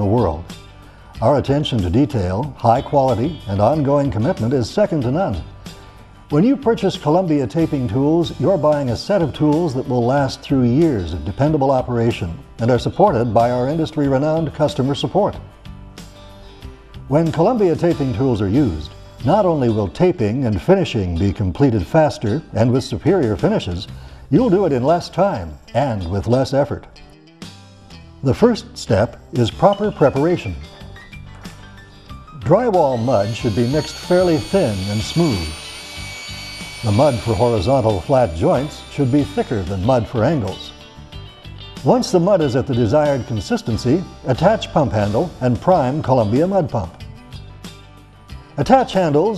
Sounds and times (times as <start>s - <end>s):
Speech: 0.0s - 0.5s, 1.2s - 5.5s, 6.3s - 15.4s, 17.1s - 26.9s, 28.2s - 30.7s, 32.4s - 35.5s, 36.8s - 40.8s, 41.8s - 47.0s, 48.6s - 49.3s
Music: 0.0s - 49.3s.